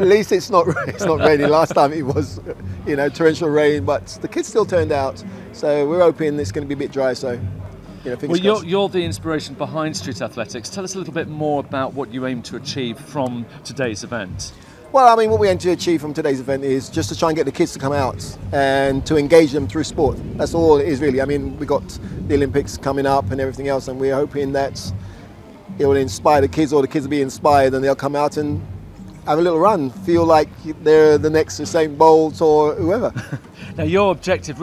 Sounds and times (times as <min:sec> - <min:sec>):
Speech: 0:00.0 - 0:07.4, 0:08.1 - 0:24.9, 0:25.7 - 0:28.6, 0:29.3 - 0:34.6
Outside, urban or manmade: 0:00.0 - 0:34.6.